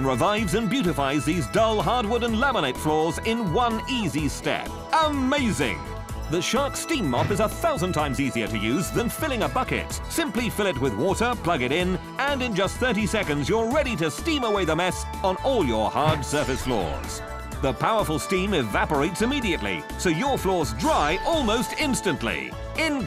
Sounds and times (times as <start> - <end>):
Music: 0.0 - 23.0
Speech: 0.0 - 23.0.